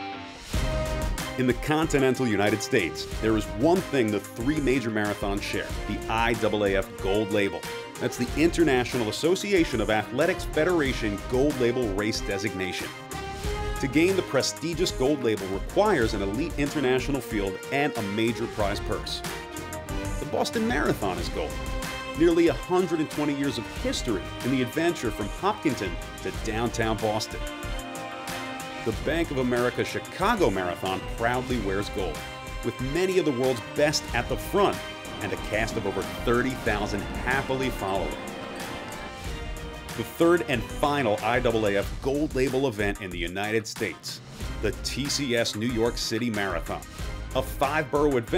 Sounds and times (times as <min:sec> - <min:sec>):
Music: 0:00.0 - 0:48.3
Speech: 0:01.4 - 0:13.0, 0:13.8 - 0:19.2, 0:20.2 - 0:21.5, 0:22.2 - 0:27.5, 0:28.9 - 0:38.3, 0:40.0 - 0:48.3
Outside, urban or manmade: 0:34.3 - 0:40.1.